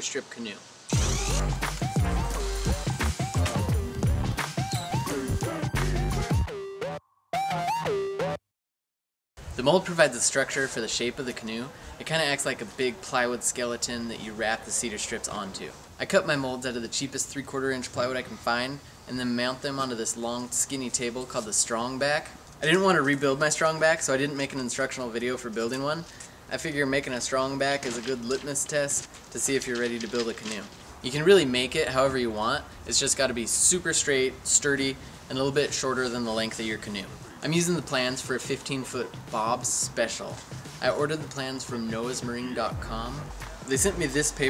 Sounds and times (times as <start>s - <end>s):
Speech: 0.0s - 0.6s, 9.6s - 44.4s.